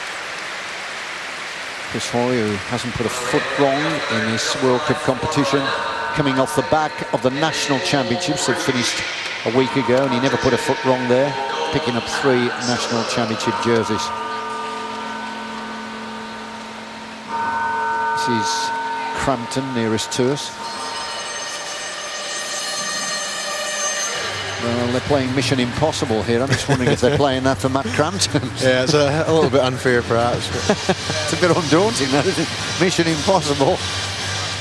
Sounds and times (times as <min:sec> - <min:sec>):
Male speech, man speaking: 0:01.9 - 0:14.1, 0:18.2 - 0:20.6, 0:24.6 - 0:33.8.